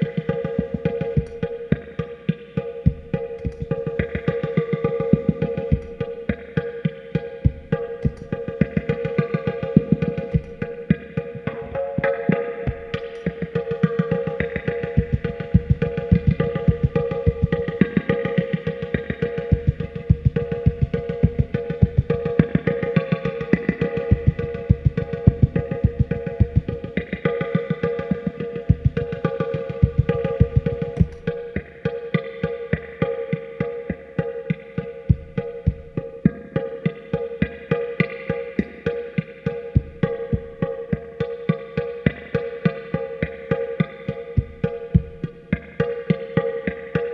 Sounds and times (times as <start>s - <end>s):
Music: 0.0s - 47.1s.